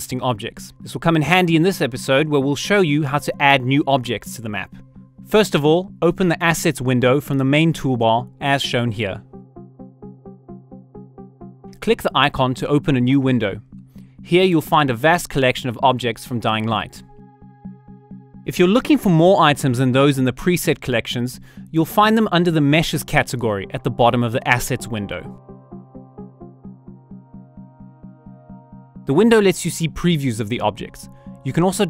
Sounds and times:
Speech: 0:00.0 - 0:09.2, 0:11.8 - 0:13.6, 0:14.3 - 0:17.0, 0:18.5 - 0:25.3, 0:29.1 - 0:31.9
Music: 0:00.0 - 0:31.9.

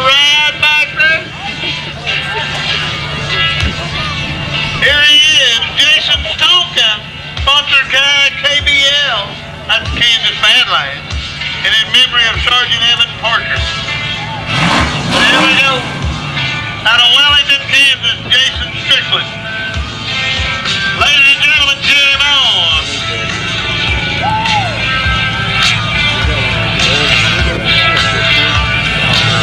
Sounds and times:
Music: 0:00.0 - 0:29.4
Vehicle: 0:00.0 - 0:29.4
Speech: 0:11.6 - 0:13.7, 0:15.2 - 0:15.9, 0:16.8 - 0:19.3, 0:21.0 - 0:23.0.

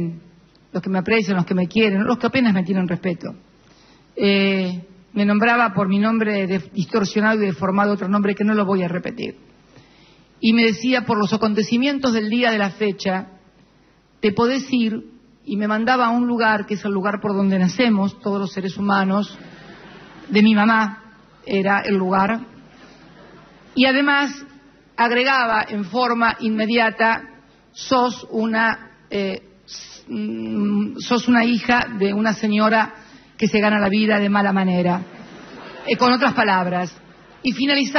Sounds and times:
Speech: 0:00.0 - 0:03.4, 0:04.2 - 0:09.4, 0:23.8 - 0:35.1.

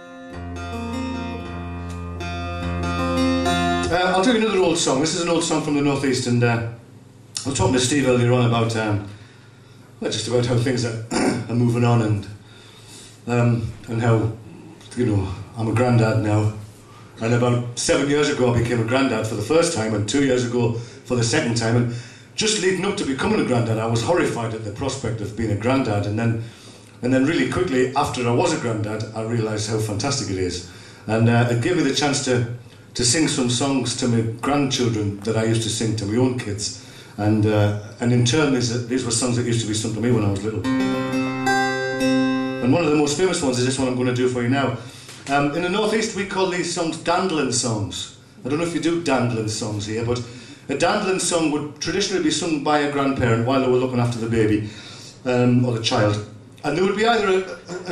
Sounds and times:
Speech: 0:03.8 - 0:06.8, 0:07.4 - 0:09.1, 0:10.0 - 0:12.4, 0:13.2 - 0:16.6, 0:17.2 - 0:40.7, 0:42.6 - 0:57.9.

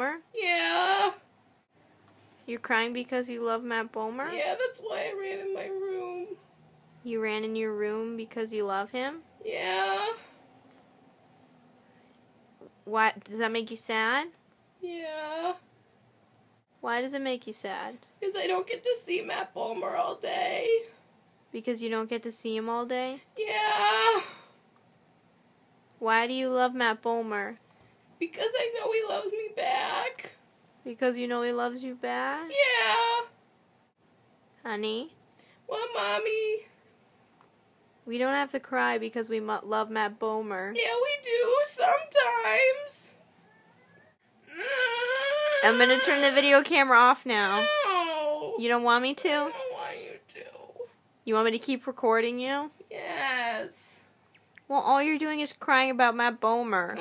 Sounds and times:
Speech: 0:02.5 - 0:06.4, 0:28.2 - 0:33.2, 0:38.1 - 0:43.2, 0:45.6 - 0:54.0.

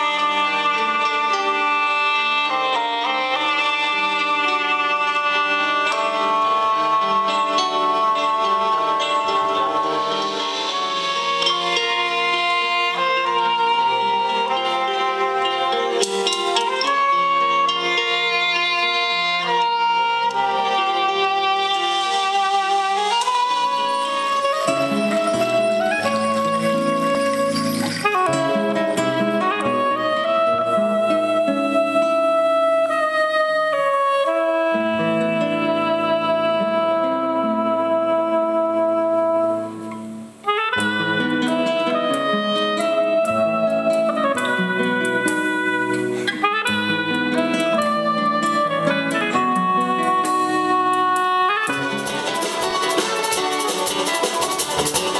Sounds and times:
Brass instrument: 0:00.0 - 0:55.1
Clarinet: 0:00.0 - 0:55.1.

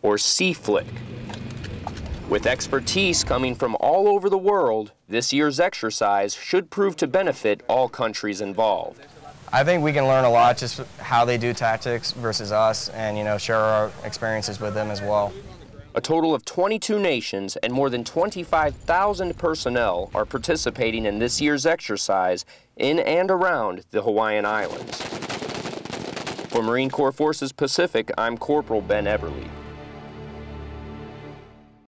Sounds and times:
Speech: 0:00.0 - 0:00.9, 0:02.3 - 0:25.0, 0:26.6 - 0:29.5
Machine gun: 0:24.5 - 0:26.7
Music: 0:28.5 - 0:31.8.

